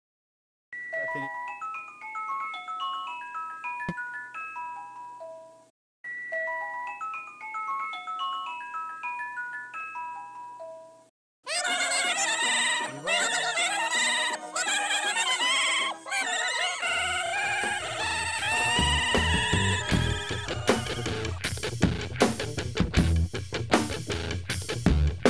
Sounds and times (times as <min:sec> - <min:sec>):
Marimba, xylophone: 0:00.8 - 0:11.1
Glockenspiel: 0:00.8 - 0:16.0.